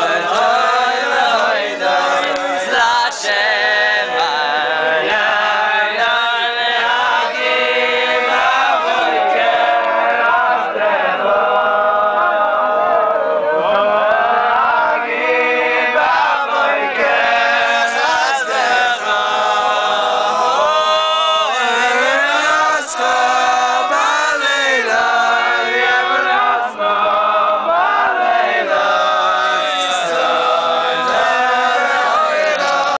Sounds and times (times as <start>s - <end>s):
Choir: 0.0s - 32.9s
Male singing: 0.0s - 32.9s.